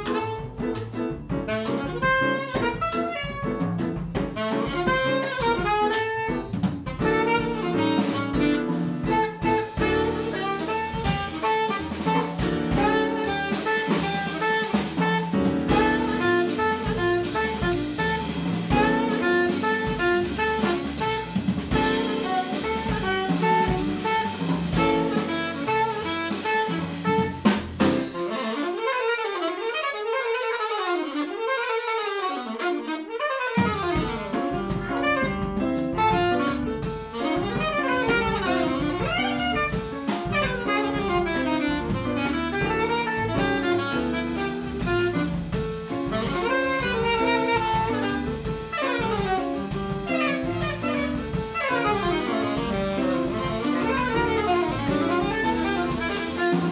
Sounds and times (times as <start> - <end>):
Jazz: 0.0 - 56.7
Piano: 0.0 - 56.7
Saxophone: 0.0 - 56.7.